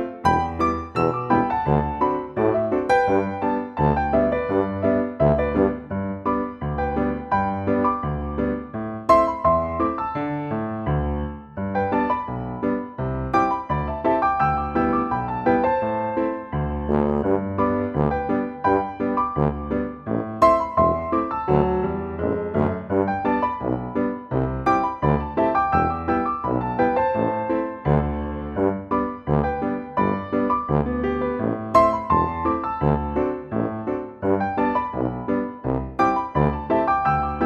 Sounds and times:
Music: 0:00.0 - 0:37.4.

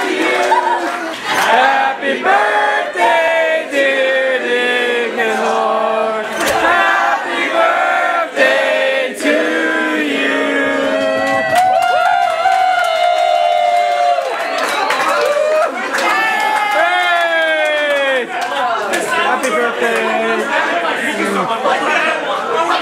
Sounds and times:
Cheering: 0:00.0 - 0:02.7, 0:10.4 - 0:22.8
Crowd: 0:00.0 - 0:22.8.

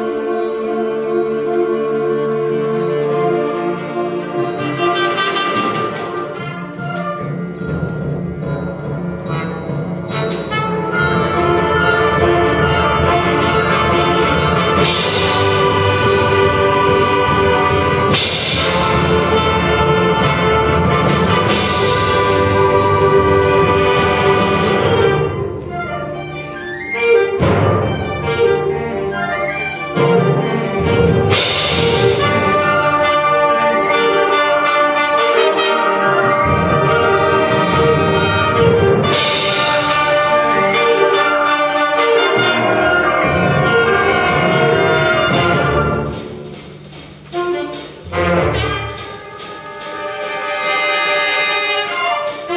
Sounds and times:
Classical music: 0:00.0 - 0:52.5
Orchestra: 0:00.0 - 0:52.5.

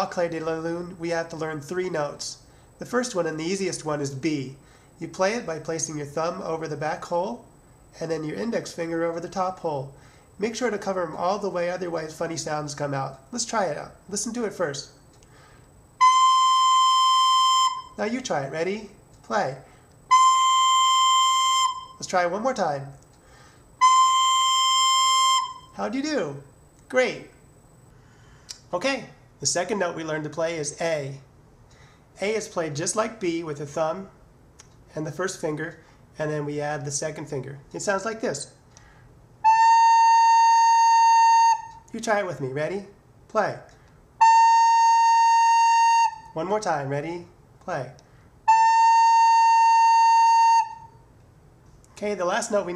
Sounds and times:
Speech: 0:00.0 - 0:15.0, 0:18.0 - 0:19.7, 0:22.0 - 0:23.0, 0:25.8 - 0:27.4, 0:28.7 - 0:31.3, 0:32.2 - 0:34.2, 0:34.9 - 0:38.6, 0:41.9 - 0:43.7, 0:46.4 - 0:48.0, 0:52.0 - 0:52.7.

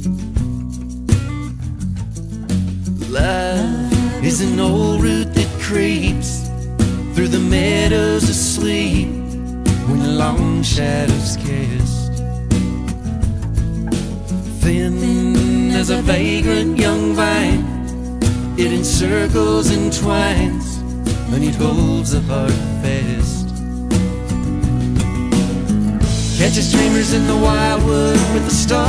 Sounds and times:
Happy music: 0:00.0 - 0:28.8.

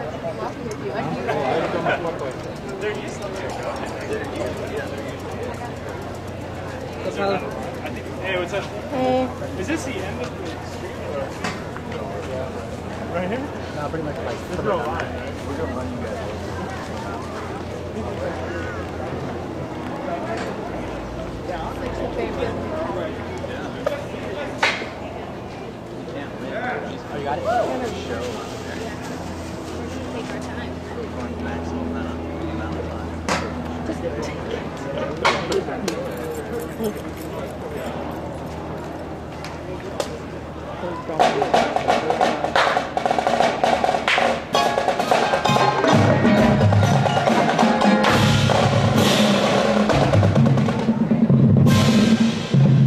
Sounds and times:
Speech: 0:00.0 - 0:43.0.

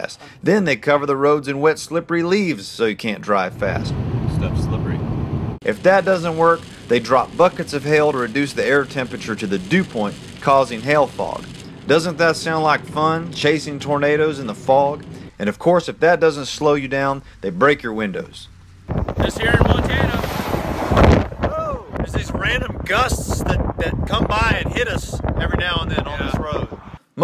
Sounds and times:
Speech: 0:00.0 - 0:05.0, 0:05.6 - 0:18.5, 0:19.2 - 0:20.2, 0:21.5 - 0:27.2
Outside, rural or natural: 0:03.4 - 0:27.2.

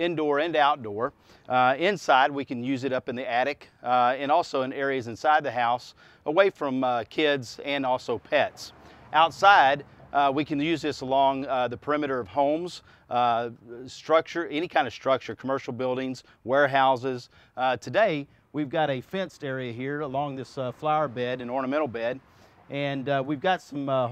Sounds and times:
Speech: 0:00.0 - 0:24.1.

